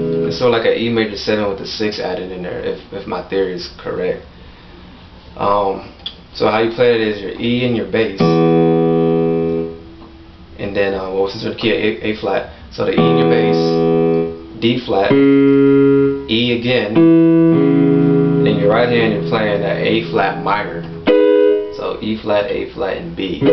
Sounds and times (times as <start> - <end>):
Piano: 0.0 - 0.5, 8.2 - 10.0, 13.0 - 22.0
Speech: 0.3 - 4.3, 5.4 - 8.4, 10.6 - 13.9, 14.6 - 15.2, 16.3 - 17.0, 18.5 - 20.9, 21.8 - 23.5.